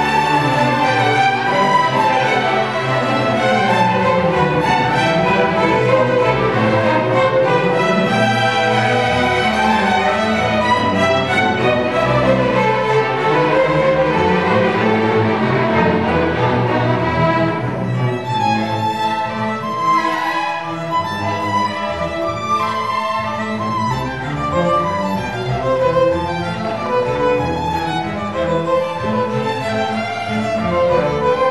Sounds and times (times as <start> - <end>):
Violin, fiddle: 0.0 - 31.5.